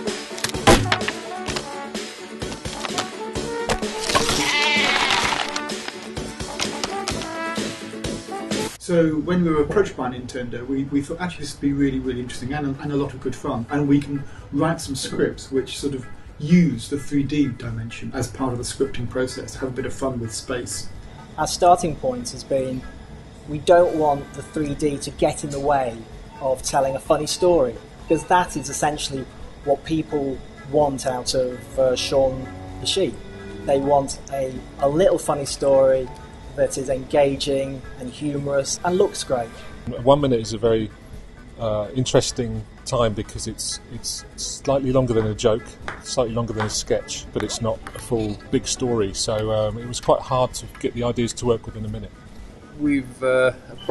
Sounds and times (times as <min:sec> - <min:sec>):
Music: 0:00.0 - 0:53.9
Speech: 0:08.8 - 0:22.9, 0:23.5 - 0:40.9, 0:41.6 - 0:52.1, 0:52.8 - 0:53.9.